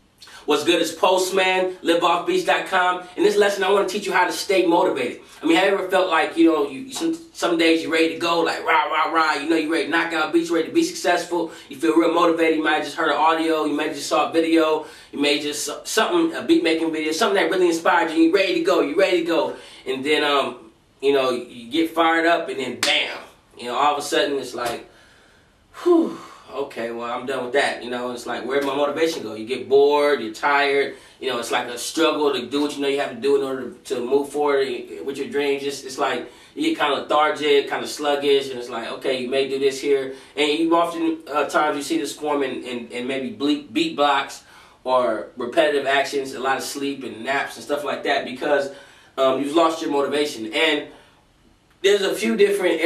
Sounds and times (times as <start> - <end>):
Speech: 0.2 - 24.9, 25.8 - 50.9, 51.8 - 52.8.